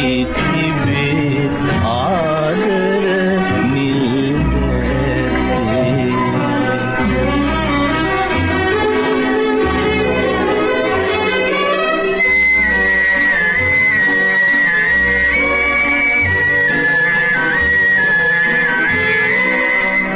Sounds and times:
Music: 0.0 - 20.1.

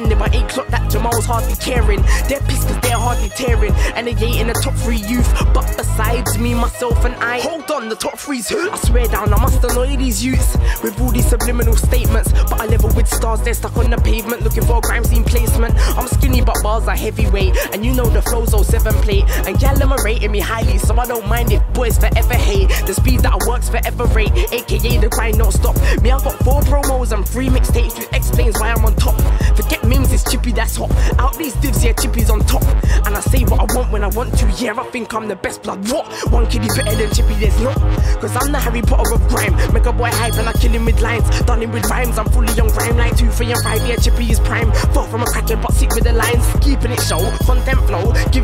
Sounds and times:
Music: 0.0 - 48.4.

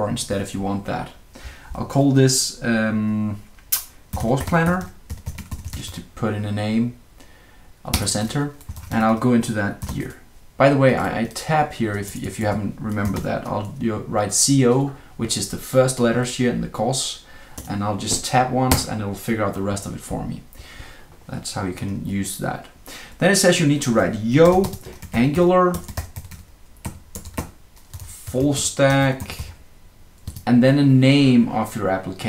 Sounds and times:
Computer keyboard: 4.1 - 6.0, 8.0 - 9.1, 9.8 - 10.0, 12.9 - 13.3, 24.4 - 28.4, 30.2 - 30.5.

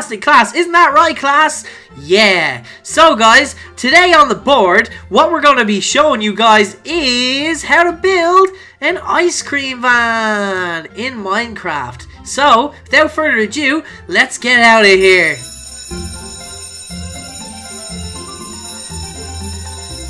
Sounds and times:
Speech: 0.0 - 15.4
Music: 0.0 - 20.1.

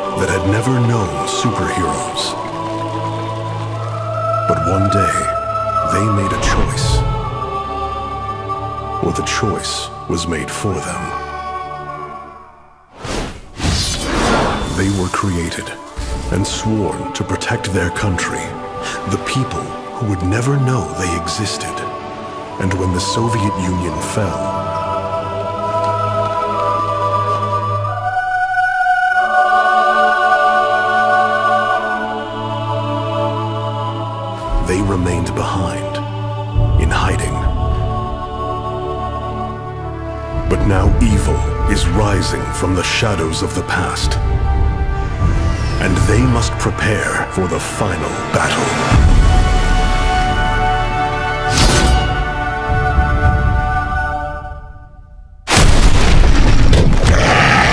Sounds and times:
Music: 0.0 - 57.7
Speech: 0.2 - 2.4, 4.5 - 7.0, 9.0 - 11.2, 13.7 - 21.9, 22.6 - 24.6, 34.5 - 36.0, 36.7 - 37.5, 40.5 - 44.2, 45.8 - 49.0.

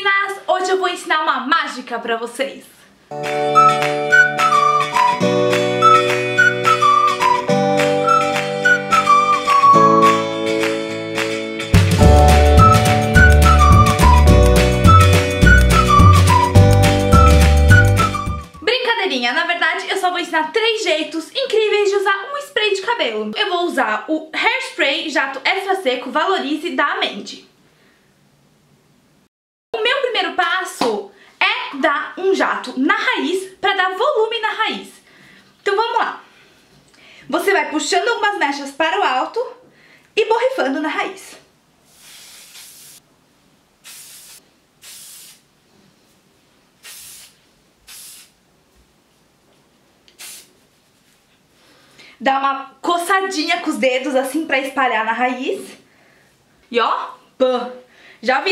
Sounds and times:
Speech: 0.0 - 2.9, 18.6 - 27.5, 29.8 - 35.0, 35.6 - 36.2, 37.3 - 39.6, 40.2 - 41.5, 52.2 - 55.8, 56.7 - 58.5.

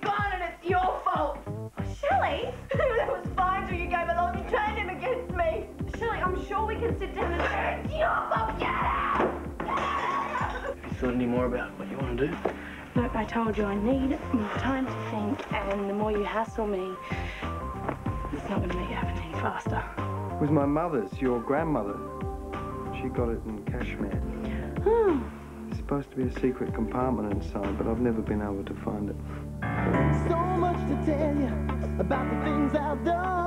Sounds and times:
Music: 0.0 - 33.4.

